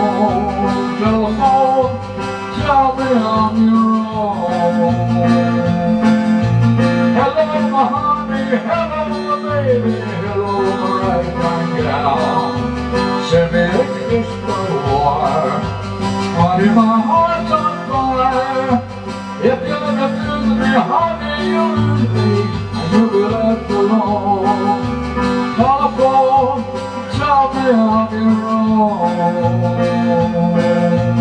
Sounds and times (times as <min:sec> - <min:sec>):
Music: 0:00.0 - 0:31.2.